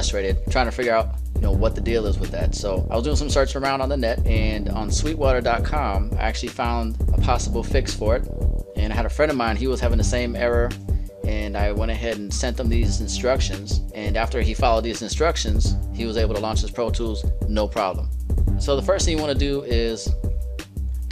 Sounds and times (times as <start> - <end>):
Speech: 0.0 - 20.2
Music: 0.0 - 21.1.